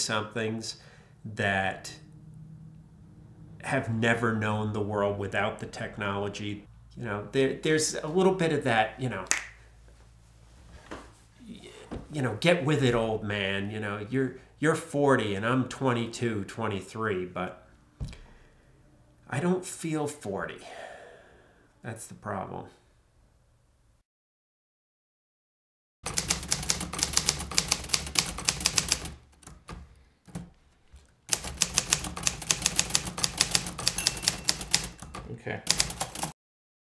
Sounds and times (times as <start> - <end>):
Speech: 0.0 - 2.1, 3.6 - 9.3, 11.4 - 17.6, 19.3 - 20.8, 21.8 - 22.8, 35.3 - 35.7
Typewriter: 26.1 - 30.5, 31.3 - 36.4.